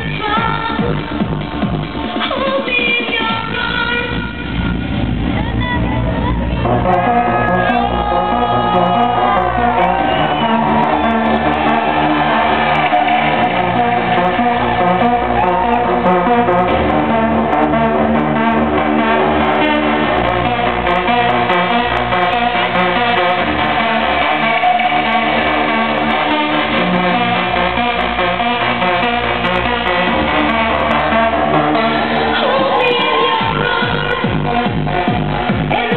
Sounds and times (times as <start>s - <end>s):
Exciting music: 0.0s - 35.9s
Soundtrack music: 0.0s - 35.9s.